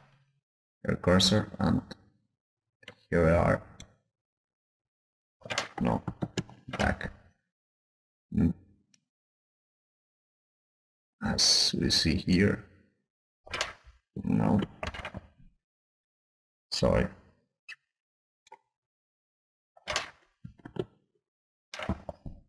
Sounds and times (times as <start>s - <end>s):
Speech: 0.8s - 2.0s, 3.1s - 3.8s, 5.8s - 6.1s, 6.7s - 7.2s, 8.3s - 8.6s, 11.2s - 12.7s, 14.2s - 14.7s, 16.7s - 17.2s.